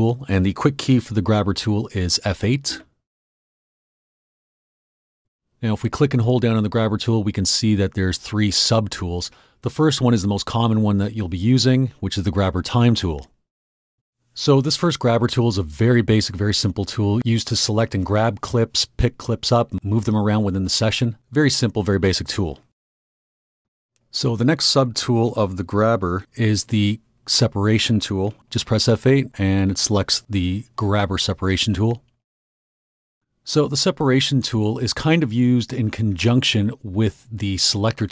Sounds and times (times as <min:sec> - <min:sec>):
Speech: 0:00.0 - 0:03.0, 0:05.6 - 0:13.4, 0:14.4 - 0:22.7, 0:24.1 - 0:32.1, 0:33.4 - 0:38.1.